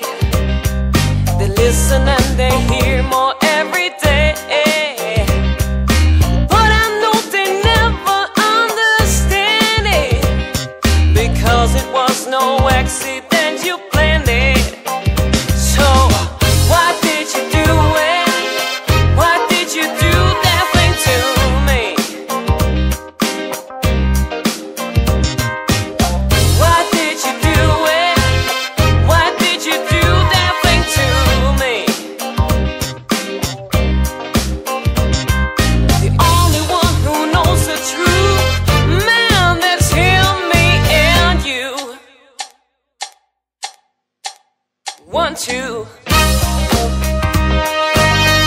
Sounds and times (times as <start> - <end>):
Funk: 0.0 - 41.9, 45.0 - 48.4.